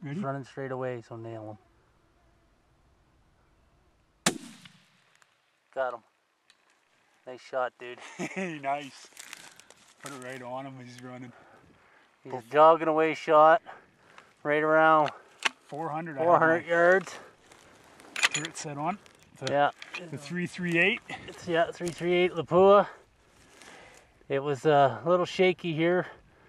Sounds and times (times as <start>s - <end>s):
Speech: 0.0s - 1.6s, 7.3s - 9.0s, 10.0s - 11.4s, 24.3s - 26.2s.